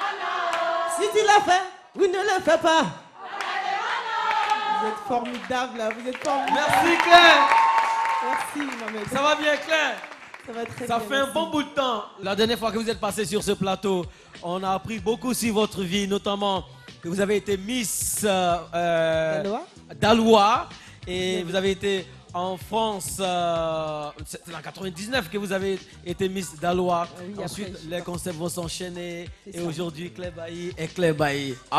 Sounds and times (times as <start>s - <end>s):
Speech: 1.0s - 3.0s, 8.5s - 31.7s.